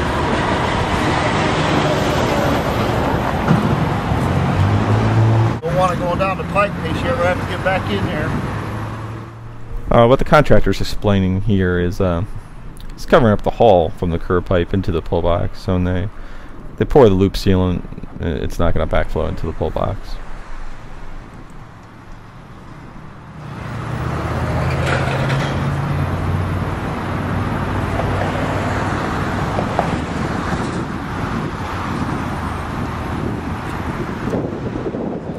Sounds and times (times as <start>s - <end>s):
Traffic noise, roadway noise: 0.0s - 35.3s
Speech: 5.6s - 8.4s, 9.9s - 12.3s, 12.9s - 16.1s, 16.8s - 20.2s.